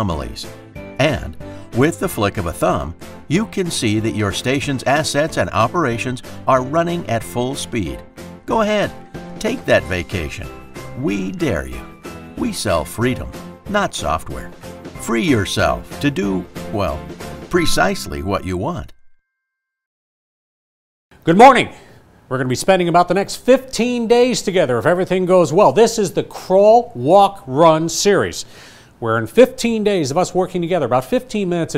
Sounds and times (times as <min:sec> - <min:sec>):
Speech: 0:00.0 - 0:19.0, 0:21.2 - 0:31.7
Music: 0:00.0 - 0:19.2.